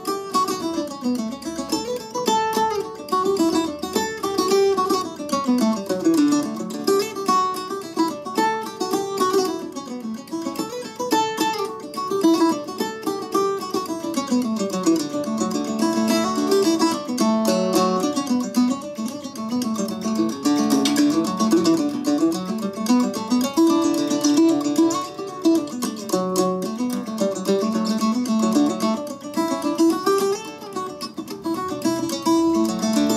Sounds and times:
Mandolin: 0.0s - 33.1s.

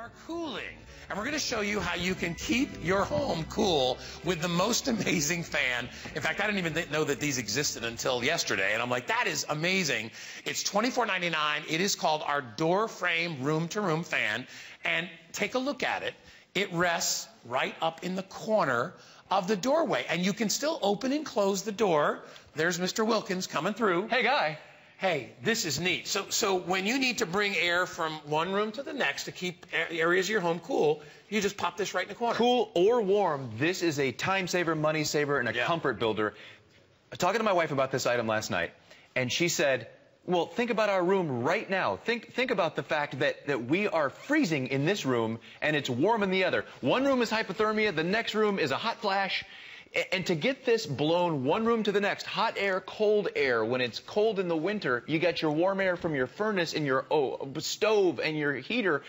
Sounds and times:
Speech: 0.0s - 36.4s, 37.1s - 59.0s.

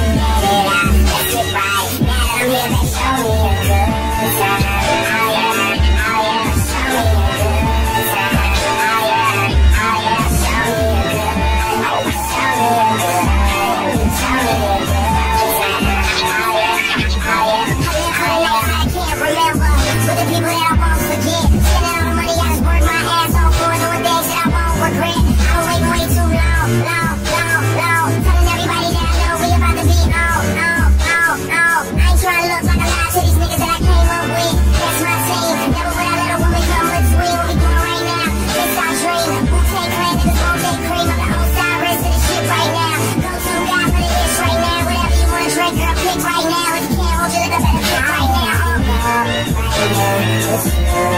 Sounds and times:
Music: 0.0s - 51.1s.

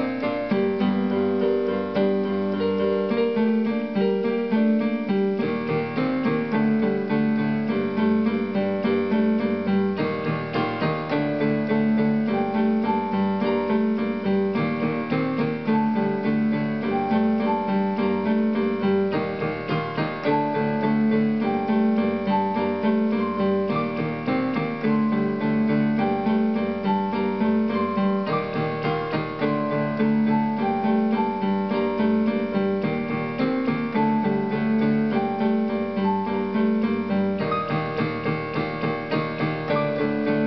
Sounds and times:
Electric piano: 0.0s - 40.4s.

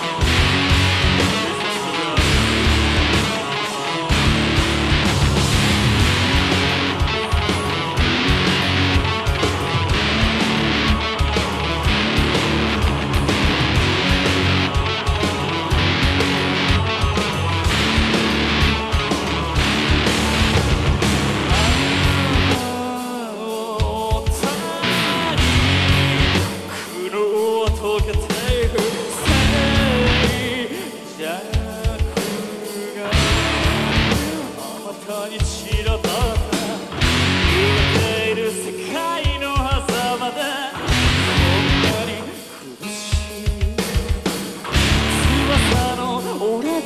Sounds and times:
Rhythm and blues: 0.0s - 46.8s.

